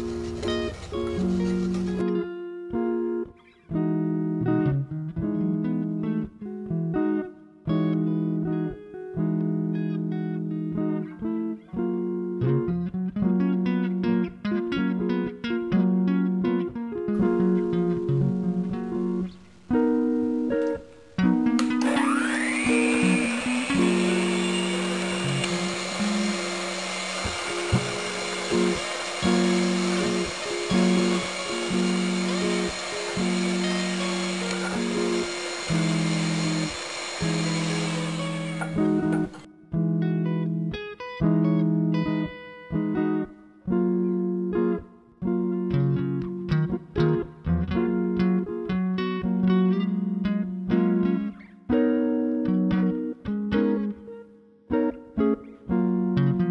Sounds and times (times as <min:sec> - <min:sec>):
Blender: 0:00.0 - 0:02.0, 0:21.6 - 0:39.5
Music: 0:00.0 - 0:56.5.